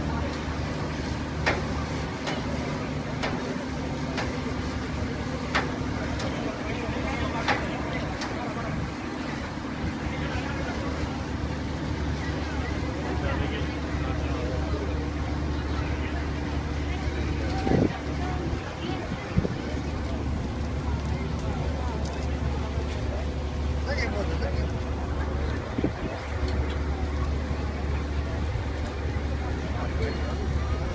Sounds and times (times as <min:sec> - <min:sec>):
Speech: 0:00.0 - 0:30.9
Vehicle: 0:00.0 - 0:30.9.